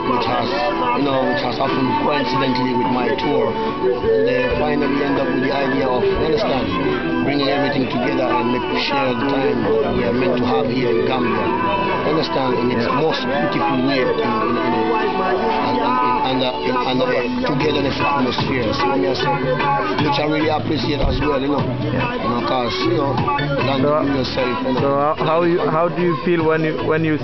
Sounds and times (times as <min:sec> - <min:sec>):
Speech: 0:00.0 - 0:03.6, 0:04.2 - 0:19.4, 0:20.0 - 0:27.2
Music: 0:00.0 - 0:27.2.